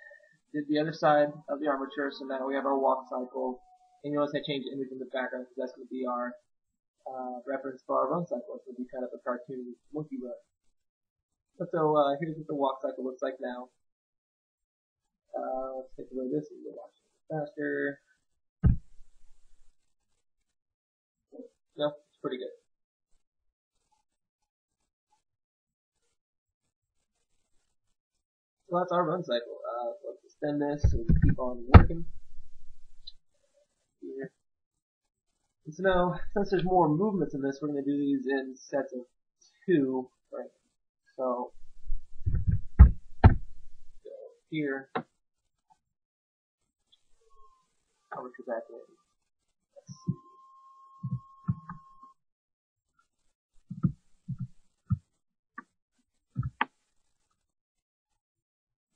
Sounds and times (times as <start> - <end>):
Speech: 0.0 - 6.4, 7.1 - 10.4, 11.6 - 13.8, 15.4 - 18.0, 21.8 - 22.6, 28.7 - 32.0, 34.0 - 34.4, 35.7 - 39.1, 39.7 - 40.5, 41.2 - 41.5, 44.1 - 45.0, 48.2 - 48.9.